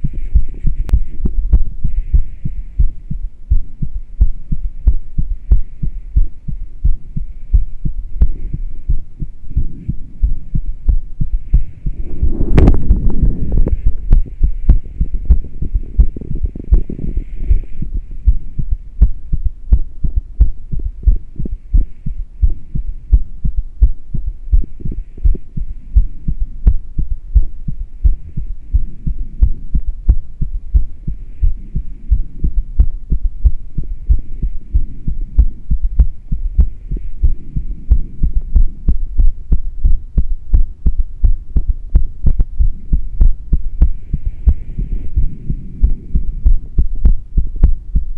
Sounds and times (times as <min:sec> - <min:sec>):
Heart sounds, heartbeat: 0:00.0 - 0:48.1.